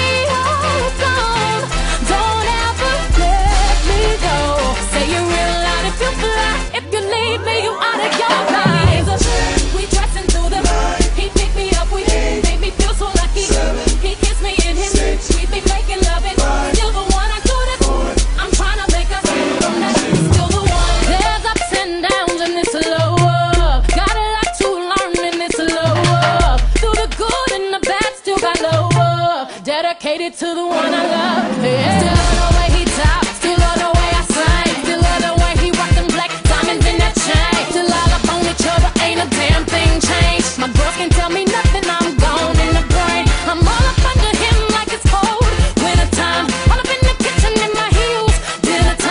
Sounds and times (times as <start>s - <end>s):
Hip hop music: 0.0s - 49.1s
Singing: 0.0s - 49.1s.